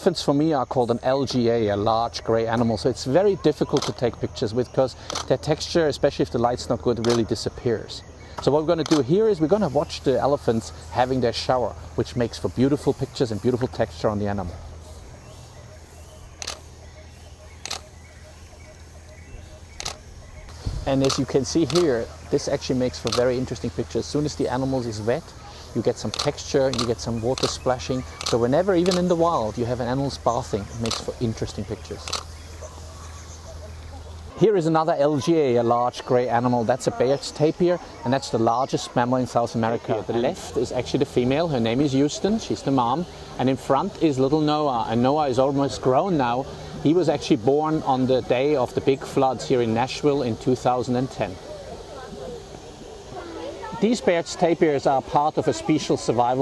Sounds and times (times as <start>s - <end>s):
Speech: 0.0s - 14.6s, 20.8s - 32.2s, 34.3s - 52.4s, 53.1s - 56.4s.